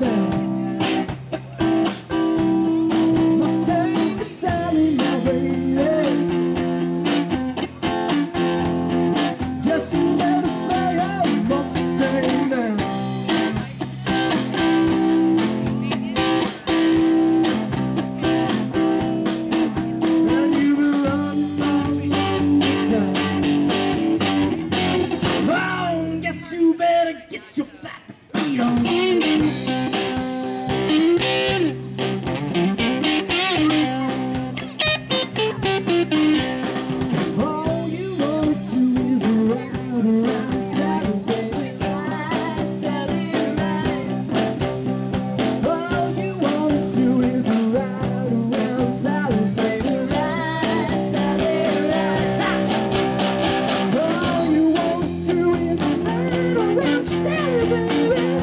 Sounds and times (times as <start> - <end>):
Electric guitar: 0.0 - 27.0, 28.0 - 58.4.